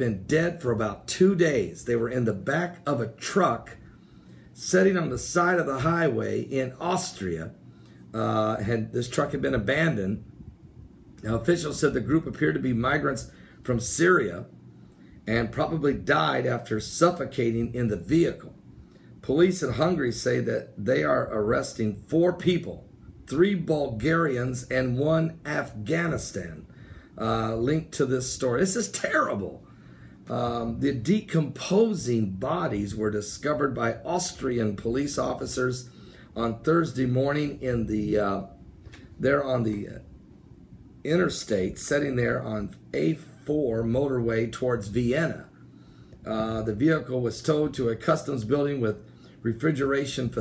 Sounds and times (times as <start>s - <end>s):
Speech: 0.0s - 3.8s, 4.6s - 10.3s, 11.2s - 14.5s, 15.3s - 18.6s, 19.2s - 29.6s, 30.3s - 38.6s, 39.2s - 40.1s, 41.0s - 45.5s, 46.3s - 50.4s.